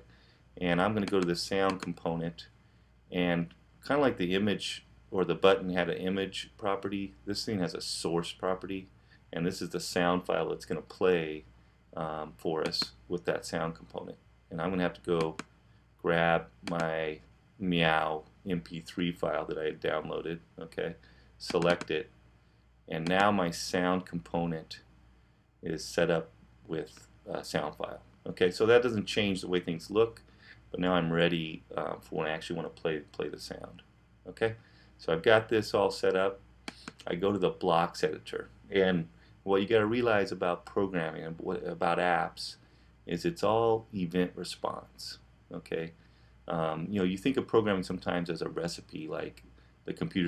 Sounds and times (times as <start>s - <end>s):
Speech: 0.6s - 15.4s, 16.0s - 22.1s, 22.9s - 24.9s, 25.6s - 36.4s, 37.0s - 50.2s.